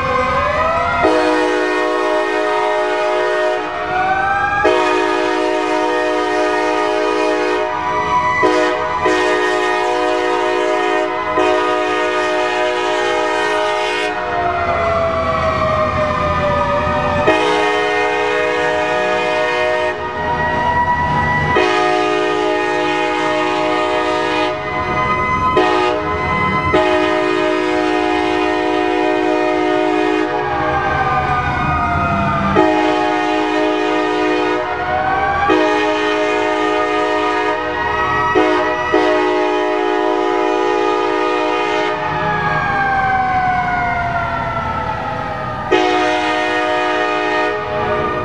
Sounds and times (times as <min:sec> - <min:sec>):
Railroad car, train wagon: 0:00.0 - 0:48.2
Train horn: 0:01.0 - 0:14.7, 0:17.2 - 0:20.6, 0:21.5 - 0:31.2, 0:32.5 - 0:42.4, 0:45.7 - 0:48.2.